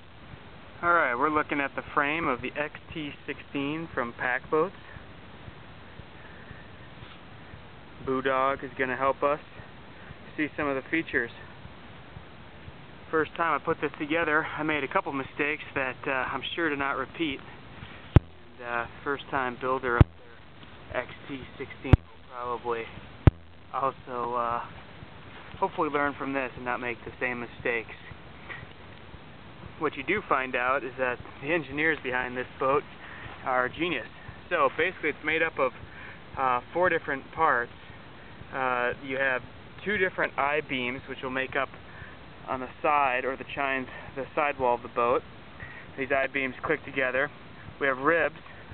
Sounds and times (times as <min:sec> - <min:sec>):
Speech: 0:00.8 - 0:05.0, 0:08.0 - 0:09.6, 0:10.3 - 0:11.6, 0:13.1 - 0:17.5, 0:18.5 - 0:23.0, 0:23.7 - 0:24.8, 0:25.5 - 0:28.2, 0:29.8 - 0:37.8, 0:38.5 - 0:41.8, 0:42.4 - 0:45.2, 0:45.9 - 0:48.6.